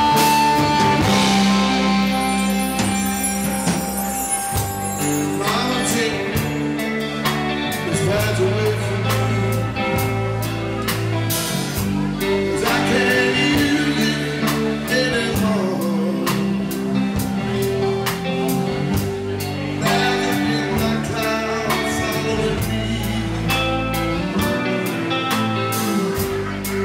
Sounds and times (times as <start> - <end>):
Music: 0.0 - 26.8
Speech: 5.2 - 26.8.